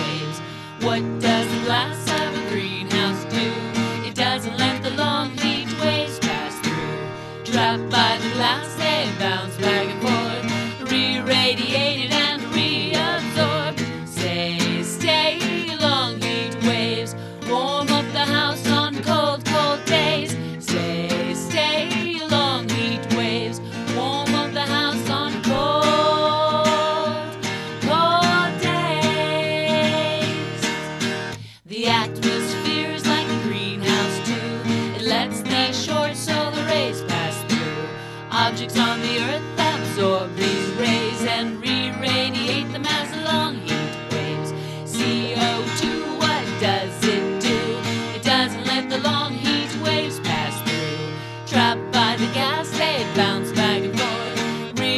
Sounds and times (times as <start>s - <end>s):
Music: 0.0s - 54.9s.